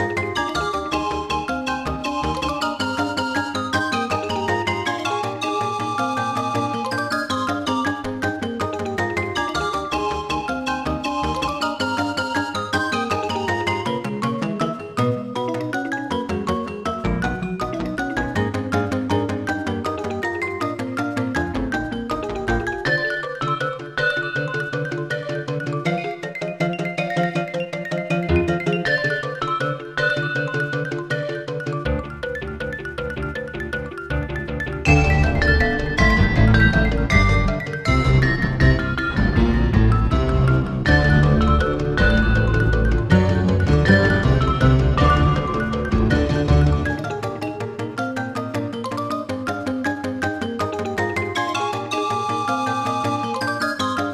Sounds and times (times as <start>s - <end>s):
Background music: 0.0s - 54.1s.